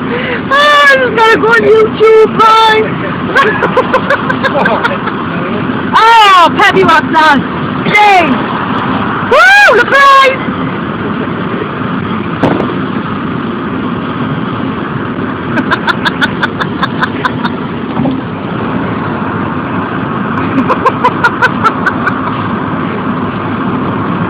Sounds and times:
Wind noise (microphone): 12.4 - 12.9.

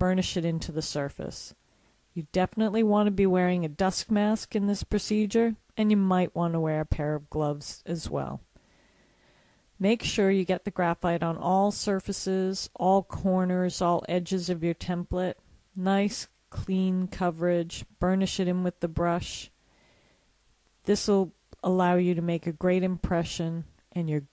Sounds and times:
Speech: 0.0 - 1.6, 2.2 - 8.5, 9.8 - 19.6, 20.8 - 24.3.

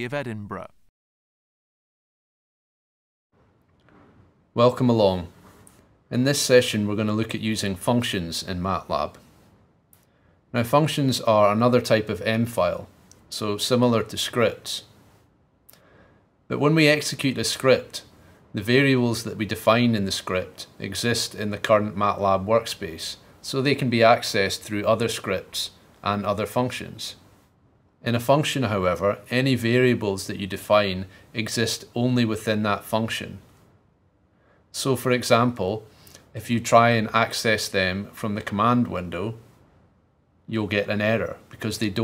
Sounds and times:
Speech: 0.0 - 0.9, 4.6 - 5.4, 6.1 - 9.2, 10.6 - 15.0, 16.5 - 27.2, 28.0 - 33.5, 34.8 - 39.5, 40.5 - 42.0.

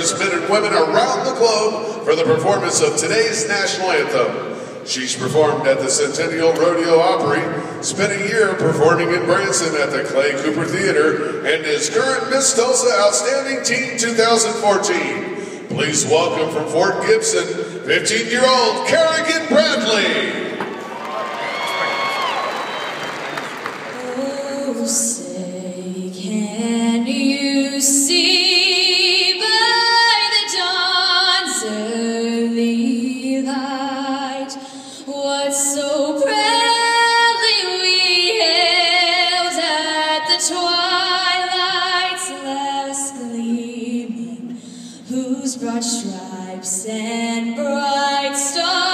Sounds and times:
Speech: 0.0 - 20.4.

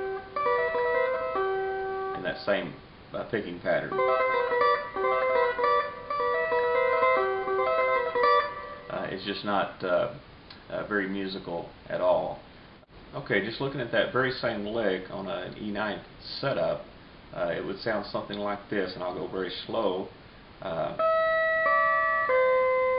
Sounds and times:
Music: 0.0 - 2.2, 3.9 - 9.1, 21.0 - 22.9
Speech: 2.2 - 4.0, 8.9 - 12.5, 13.1 - 21.0.

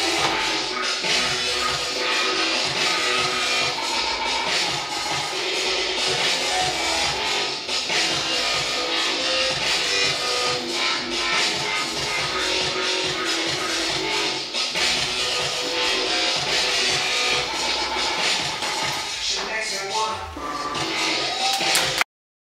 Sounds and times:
Dubstep: 0.0 - 22.0.

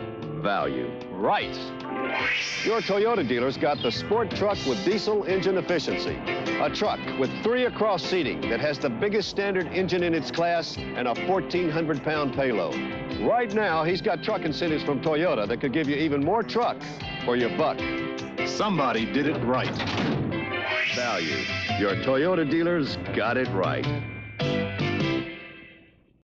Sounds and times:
Music: 0.0 - 26.2
Speech: 2.7 - 17.8, 18.6 - 19.8, 21.0 - 23.9.

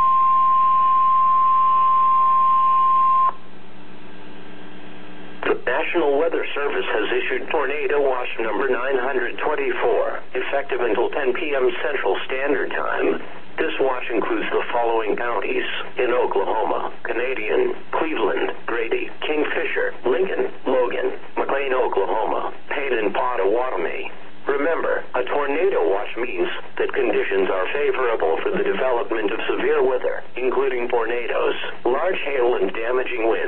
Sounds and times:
Radio: 4.4 - 33.4
Speech: 5.4 - 33.4.

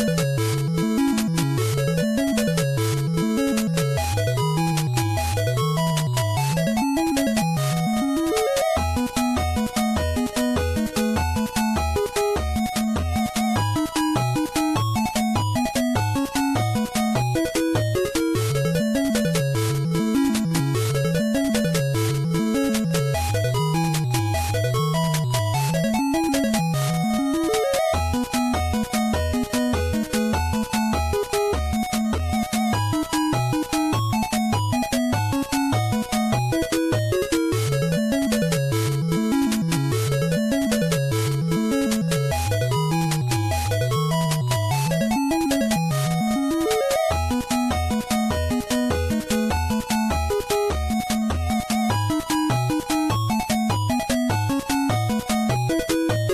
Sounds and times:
Video game music: 0.0 - 56.3.

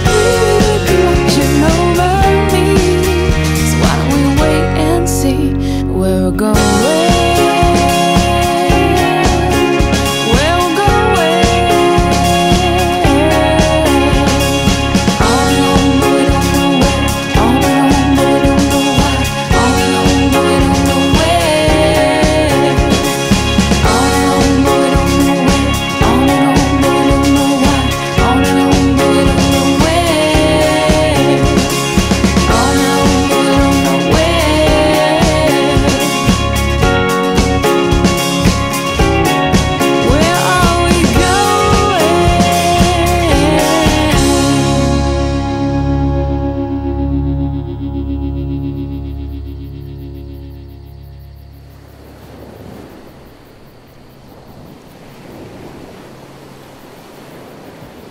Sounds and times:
Music: 0.0 - 52.0.

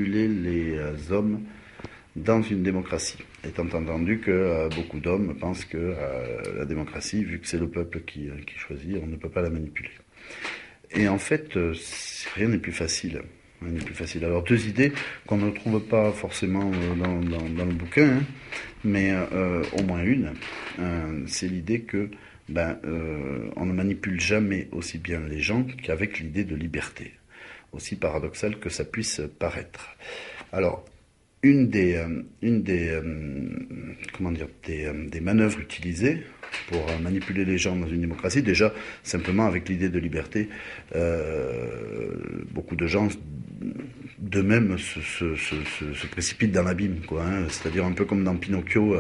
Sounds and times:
Speech: 0.0 - 1.6, 2.2 - 10.0, 10.9 - 49.0.

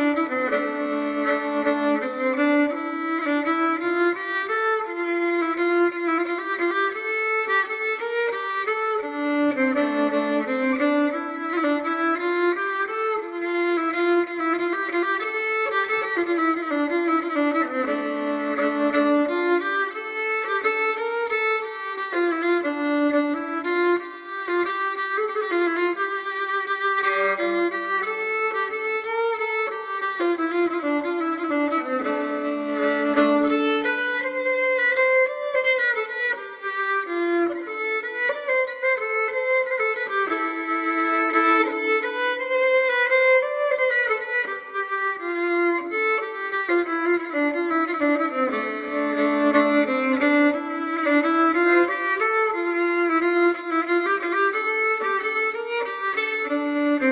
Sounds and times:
Violin, fiddle: 0.0 - 57.1.

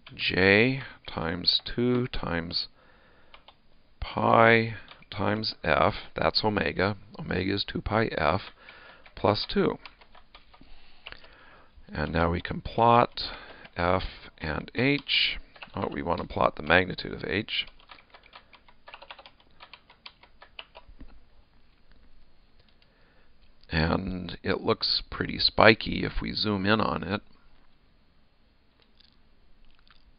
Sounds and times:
Speech: 0.1 - 2.7, 4.0 - 8.5, 9.2 - 9.8, 11.9 - 17.7, 23.7 - 27.3
Typing: 3.3 - 3.6, 8.3 - 11.4, 14.9 - 20.9.

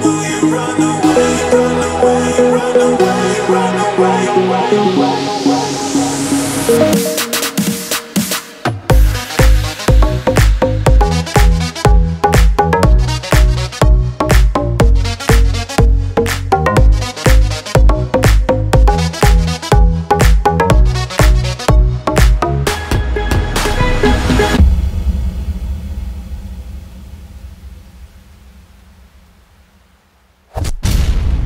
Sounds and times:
Music: 0.0 - 28.4.

